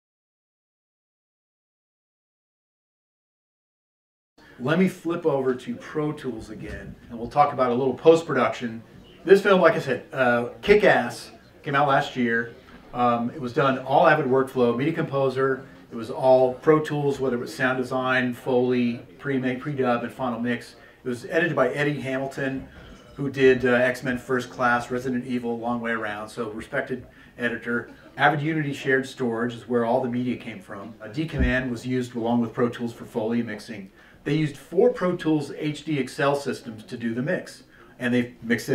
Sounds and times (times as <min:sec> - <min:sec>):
Speech: 0:04.4 - 0:38.7.